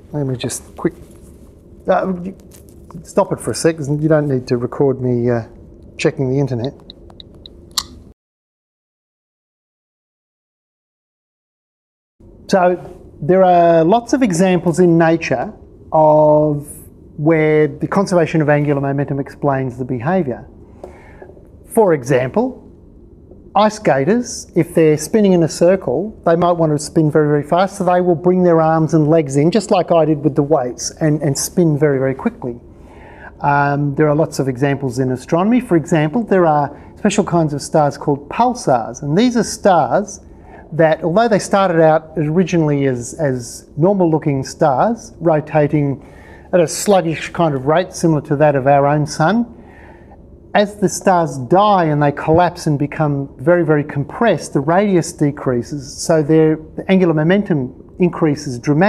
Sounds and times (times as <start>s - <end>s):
Speech: 0.1s - 1.0s, 1.9s - 6.8s, 12.5s - 20.5s, 21.7s - 22.6s, 23.6s - 32.6s, 33.3s - 49.6s, 50.6s - 58.8s.